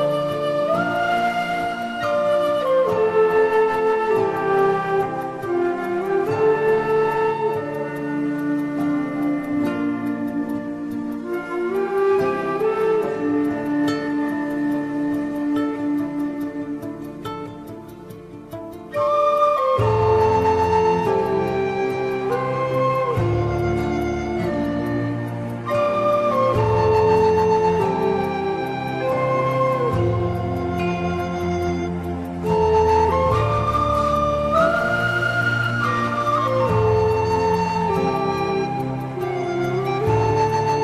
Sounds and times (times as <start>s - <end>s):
Flute: 0.0s - 40.8s.